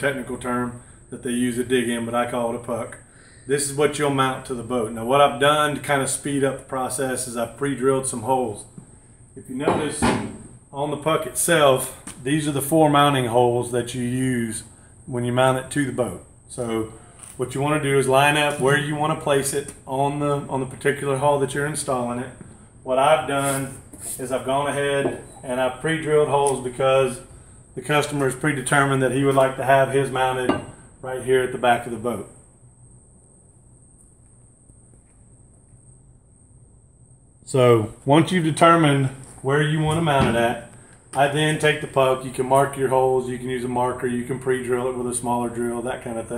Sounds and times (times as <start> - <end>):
Speech: 0.0 - 8.7, 9.4 - 32.4, 37.5 - 46.3.